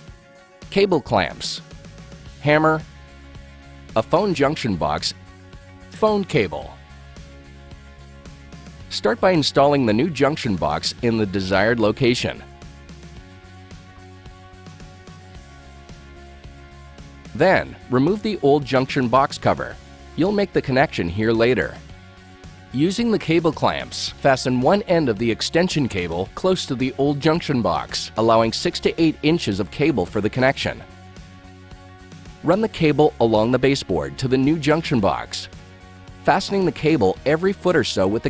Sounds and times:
Music: 0:00.0 - 0:38.2
Speech: 0:00.7 - 0:01.6, 0:02.4 - 0:02.8, 0:04.0 - 0:05.2, 0:06.0 - 0:06.8, 0:08.9 - 0:12.5, 0:17.3 - 0:21.9, 0:22.7 - 0:30.9, 0:32.4 - 0:35.5, 0:36.2 - 0:38.2.

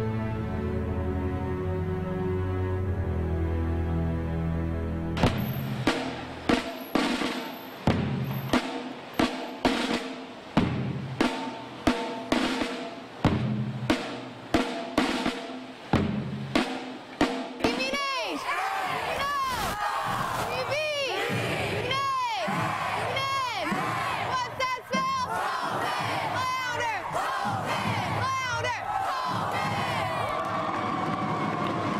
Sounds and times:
Drum roll: 0:05.2 - 0:32.0.

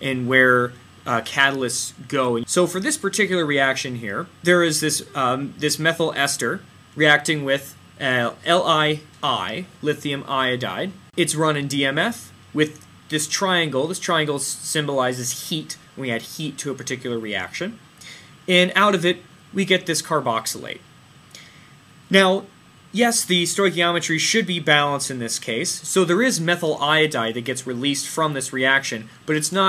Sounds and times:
Speech: 0:00.0 - 0:20.9, 0:22.1 - 0:29.6.

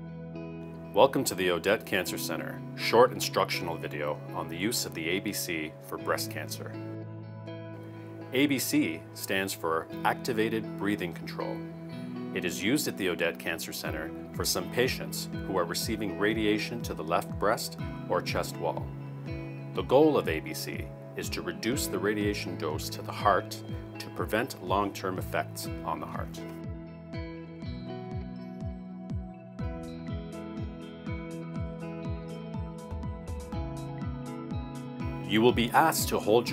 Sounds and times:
Music: 0:00.0 - 0:36.5
Speech: 0:01.0 - 0:06.8, 0:08.4 - 0:11.7, 0:12.4 - 0:18.9, 0:19.8 - 0:26.5, 0:35.3 - 0:36.5.

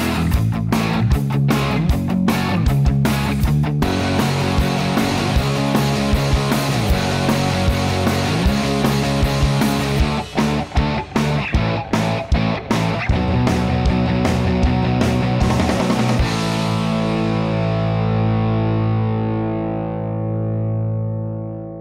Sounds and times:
Music: 0:00.0 - 0:21.8.

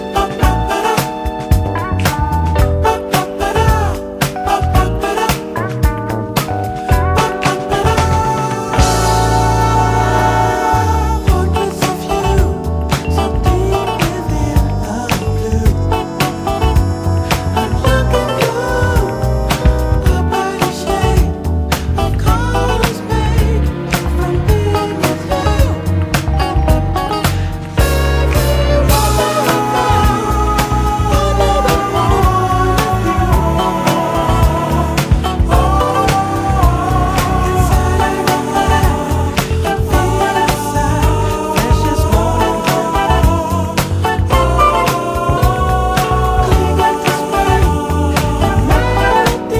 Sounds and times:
Music: 0:00.0 - 0:49.5.

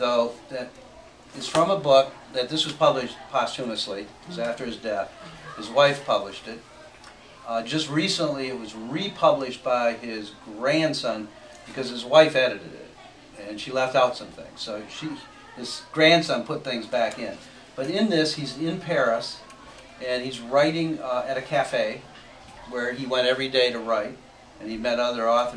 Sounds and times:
Speech: 0:00.0 - 0:25.5.

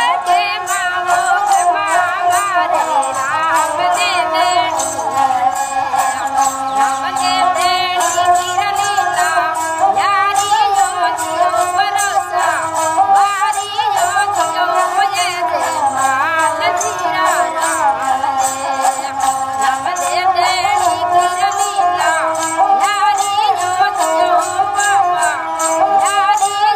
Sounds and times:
Music: 0:00.0 - 0:26.7.

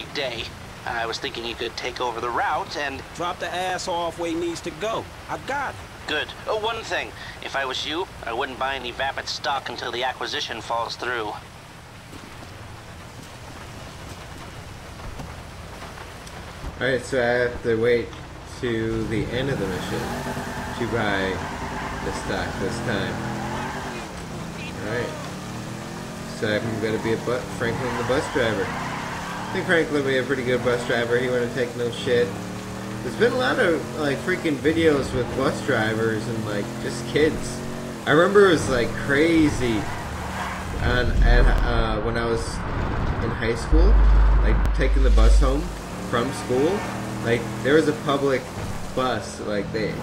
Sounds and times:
Speech: 0:00.0 - 0:11.4, 0:16.8 - 0:20.1, 0:20.7 - 0:23.2, 0:23.9 - 0:25.3, 0:26.3 - 0:28.7, 0:29.5 - 0:32.4, 0:33.0 - 0:39.9, 0:40.8 - 0:42.6, 0:43.2 - 0:50.0.

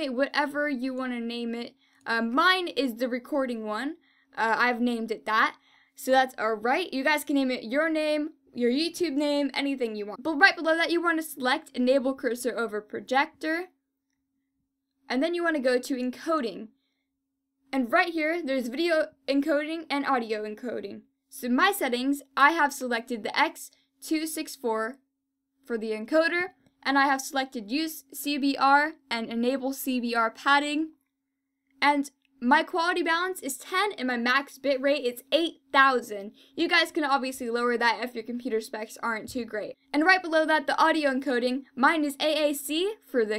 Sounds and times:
Speech: 0:00.0 - 0:13.7, 0:15.1 - 0:16.7, 0:17.7 - 0:25.0, 0:25.7 - 0:31.0, 0:31.8 - 0:43.3.

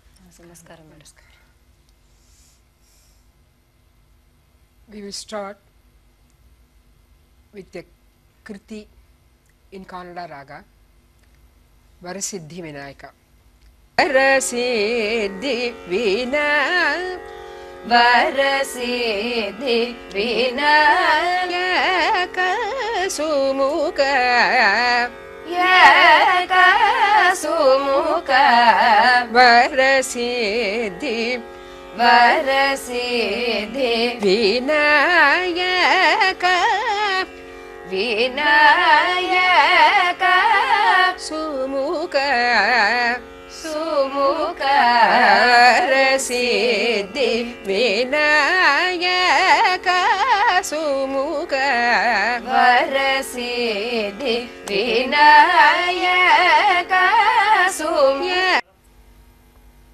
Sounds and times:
Music: 0:14.0 - 0:59.9.

